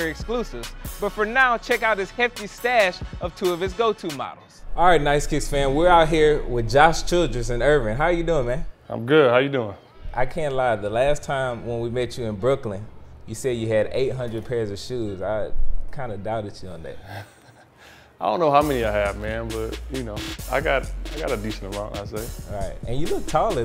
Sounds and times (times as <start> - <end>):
Speech: 0.0 - 17.1, 18.2 - 23.6.